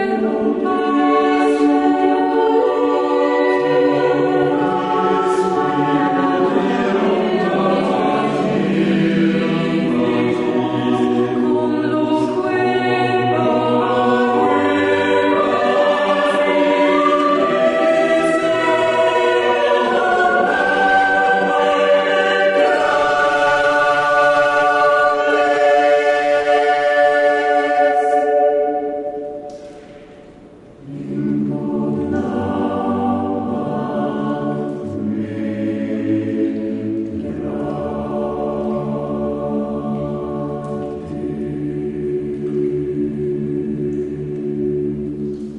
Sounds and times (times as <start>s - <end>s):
Chant: 0.0s - 45.5s.